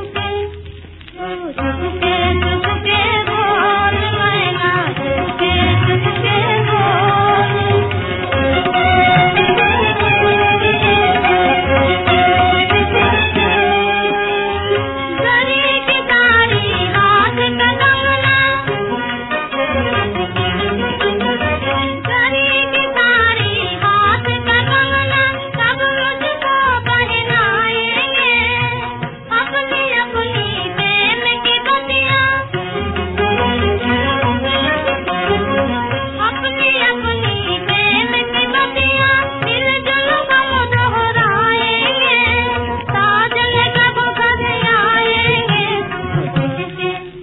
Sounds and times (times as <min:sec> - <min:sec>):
Middle Eastern music: 0:00.0 - 0:47.2.